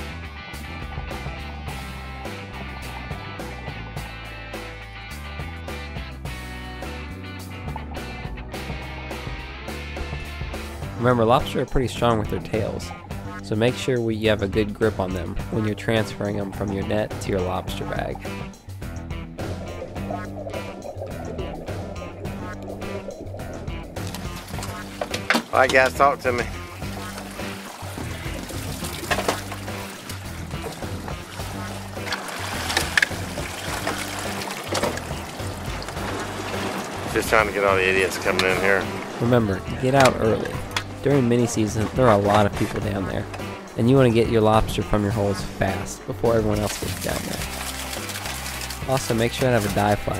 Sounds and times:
Music: 0.0s - 50.1s
Speech: 11.0s - 18.3s, 25.5s - 26.5s, 37.1s - 47.4s, 48.8s - 50.1s
Water: 13.9s - 50.1s
Liquid: 26.6s - 39.0s, 46.5s - 50.1s.

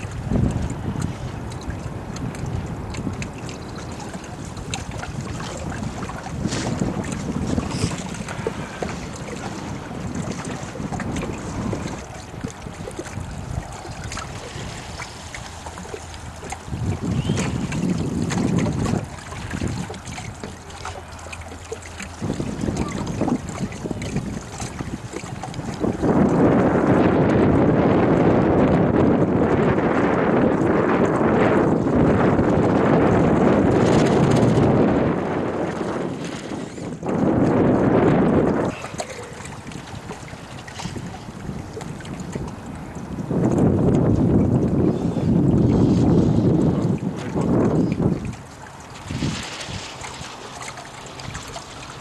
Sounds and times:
Outside, rural or natural: 0.0s - 52.0s
Slosh: 13.0s - 24.8s, 38.6s - 41.2s, 45.7s - 52.0s.

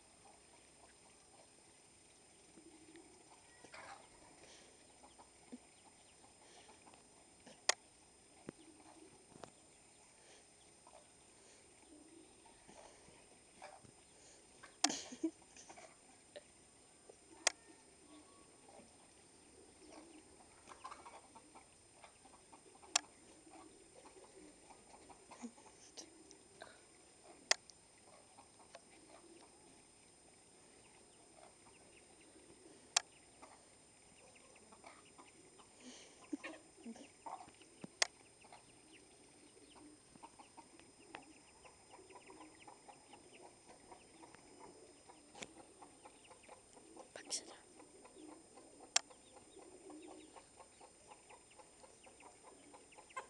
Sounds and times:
Animal: 2.5s - 15.0s, 17.3s - 29.8s, 30.8s - 53.2s.

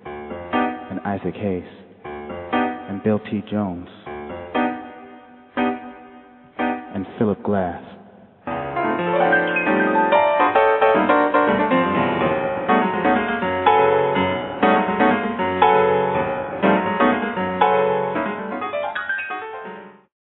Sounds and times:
Music: 0.0s - 7.6s, 8.3s - 20.1s
Speech: 0.9s - 1.9s, 2.9s - 4.1s, 6.9s - 8.1s.

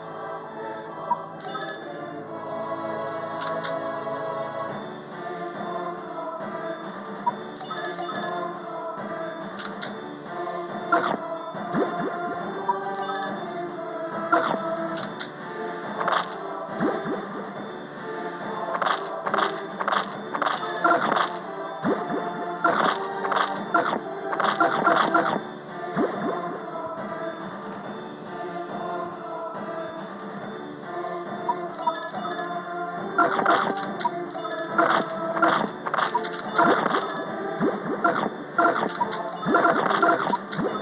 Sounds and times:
Music: 0.0s - 40.8s.

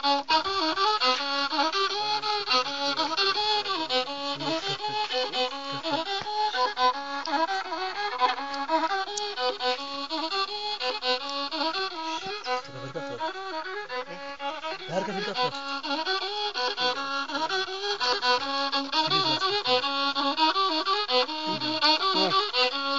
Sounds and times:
Music: 0.0s - 22.9s
Speech: 4.4s - 6.1s, 12.5s - 13.2s, 14.8s - 15.6s, 18.9s - 19.8s, 21.5s - 22.5s.

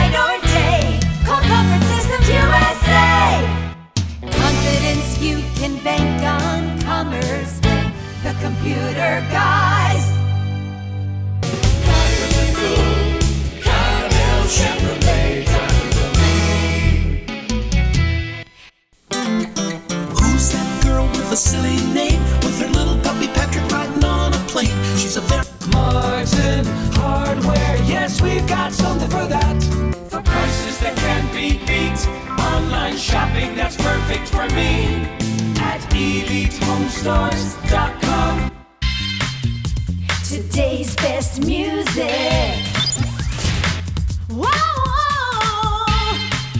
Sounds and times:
Music: 0.0s - 46.5s.

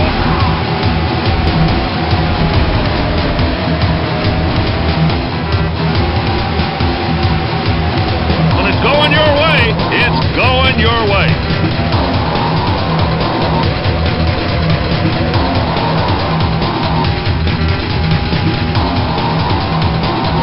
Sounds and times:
Car: 0.0s - 10.4s, 11.3s - 20.4s
Music: 0.0s - 20.4s
Speech: 8.6s - 11.4s.

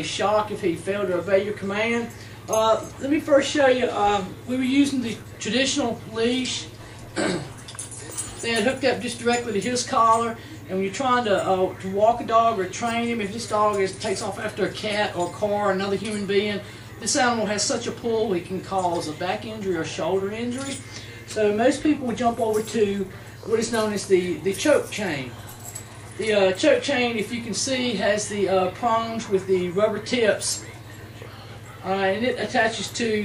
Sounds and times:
Speech: 0.0s - 7.5s, 8.2s - 25.4s, 26.2s - 33.2s.

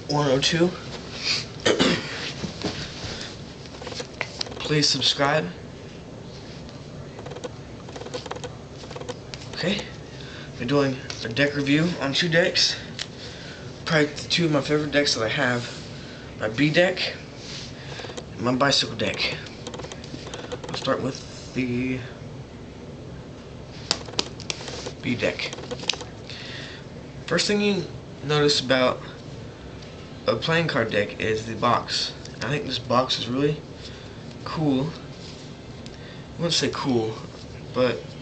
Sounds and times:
Speech: 0.1s - 0.8s, 4.6s - 5.6s, 9.6s - 10.0s, 10.6s - 12.9s, 13.9s - 15.8s, 16.4s - 17.2s, 18.4s - 19.5s, 20.7s - 22.2s, 25.0s - 25.6s, 27.3s - 29.2s, 30.3s - 33.6s, 34.4s - 35.1s, 36.4s - 38.2s.

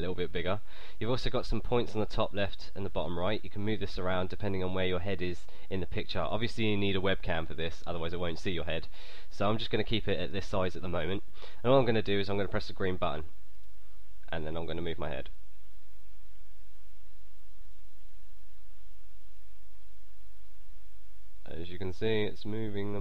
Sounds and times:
Speech: 0.0s - 13.3s, 14.3s - 15.4s, 21.4s - 23.0s.

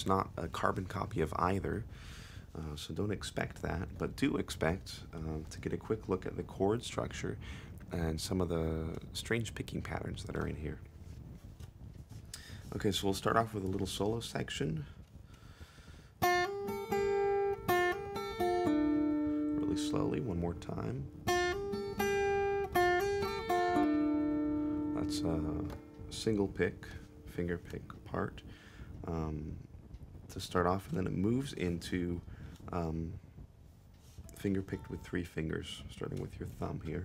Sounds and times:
Speech: 0.0s - 1.9s, 2.5s - 10.9s, 12.7s - 15.0s, 19.6s - 21.1s, 25.0s - 28.4s, 29.0s - 29.7s, 30.3s - 33.2s, 34.3s - 37.0s
Music: 16.2s - 28.5s.

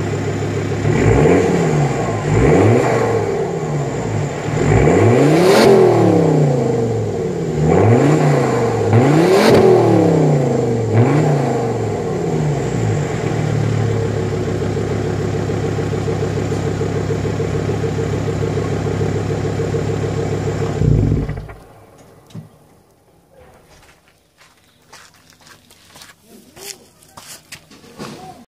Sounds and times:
Walk, footsteps: 23.4s - 28.4s.

